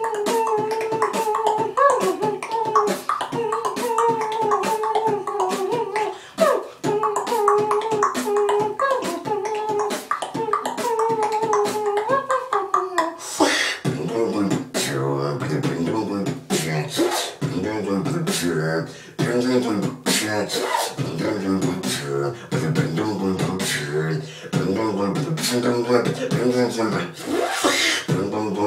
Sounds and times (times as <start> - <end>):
Dubstep: 13.2 - 18.6, 19.2 - 24.0.